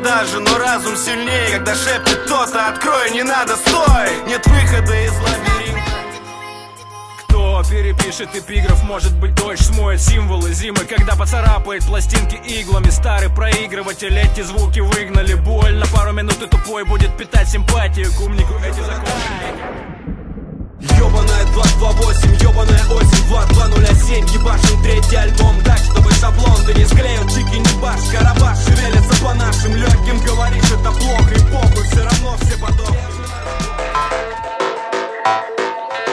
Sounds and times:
Music: 0:00.0 - 0:19.7, 0:20.8 - 0:36.1.

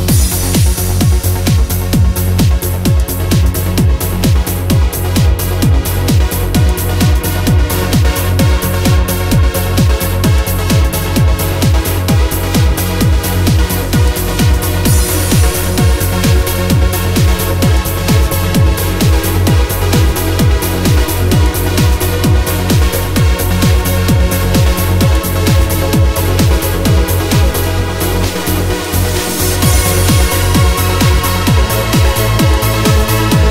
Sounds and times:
Music: 0:00.0 - 0:33.5.

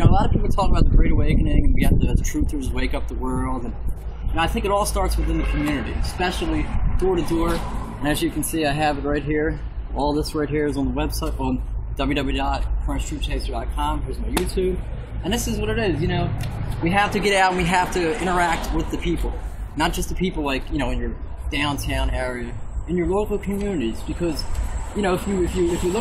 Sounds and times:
Speech: 0:00.0 - 0:26.0.

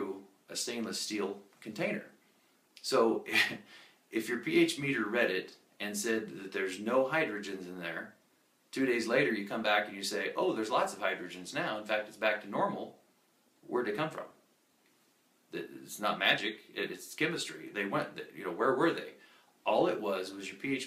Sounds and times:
Speech: 0:00.0 - 0:02.2, 0:02.8 - 0:13.0, 0:13.6 - 0:14.4, 0:15.5 - 0:20.8
Inside, small room: 0:00.0 - 0:20.8.

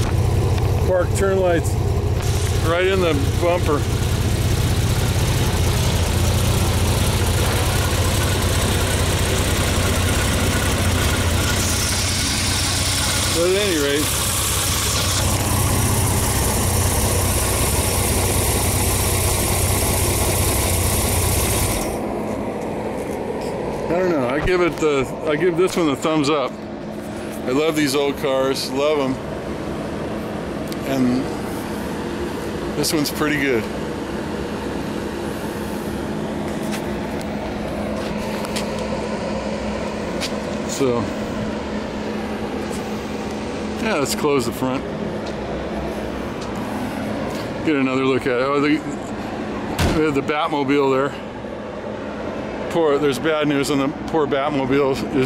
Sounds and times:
Car: 0:00.0 - 0:55.2
Idling: 0:00.0 - 0:55.2
Outside, urban or manmade: 0:00.0 - 0:55.2
Speech: 0:00.8 - 0:01.8, 0:02.6 - 0:03.9, 0:13.3 - 0:14.1, 0:23.9 - 0:26.6, 0:27.4 - 0:29.2, 0:30.8 - 0:31.3, 0:32.8 - 0:33.7, 0:40.7 - 0:41.2, 0:43.8 - 0:44.9, 0:47.6 - 0:49.0, 0:49.8 - 0:51.2, 0:52.7 - 0:55.2.

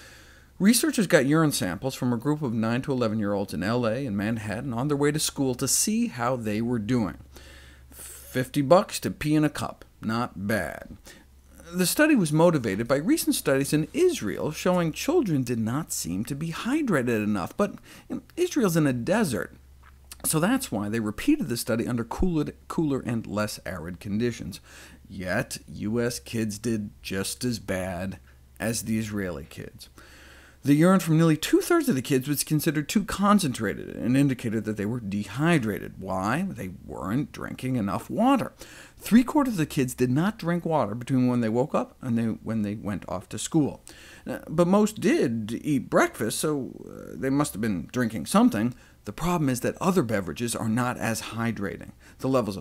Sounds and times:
Speech: 0:00.6 - 0:07.3, 0:08.0 - 0:11.0, 0:11.6 - 0:19.6, 0:20.2 - 0:29.9, 0:30.6 - 0:52.6.

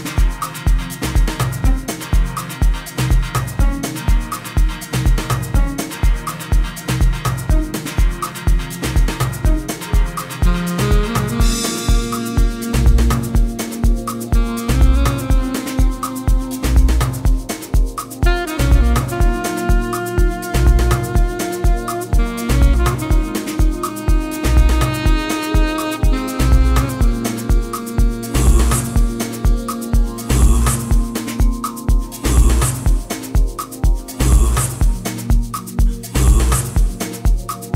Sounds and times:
Music: 0:00.0 - 0:37.7.

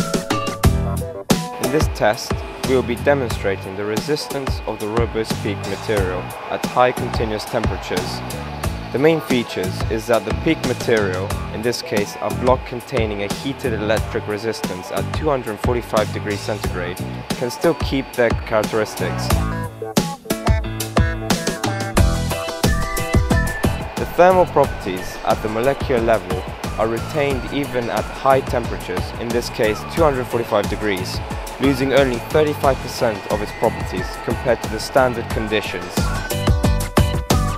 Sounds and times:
Music: 0:00.0 - 0:37.5
Speech: 0:01.6 - 0:08.3, 0:08.9 - 0:19.4, 0:24.0 - 0:36.1.

